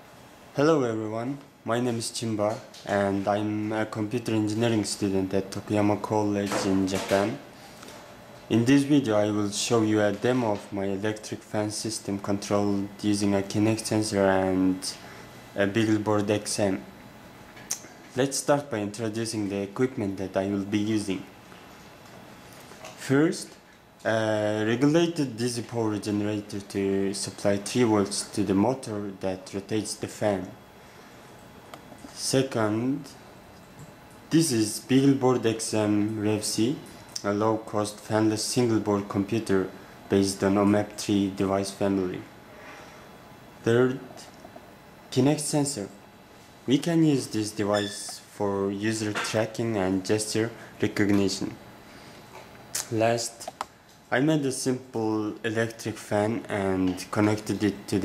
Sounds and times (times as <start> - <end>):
Speech: 0.6 - 7.5, 8.5 - 16.9, 17.7 - 21.3, 23.0 - 30.6, 32.1 - 33.2, 34.3 - 42.3, 43.6 - 44.4, 45.1 - 46.0, 46.7 - 51.6, 52.8 - 58.0.